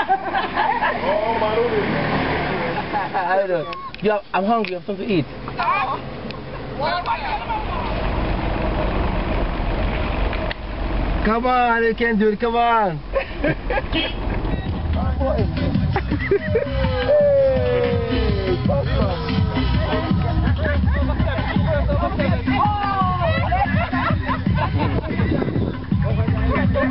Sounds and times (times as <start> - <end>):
Outside, urban or manmade: 0.0 - 26.9
Music: 14.4 - 26.9.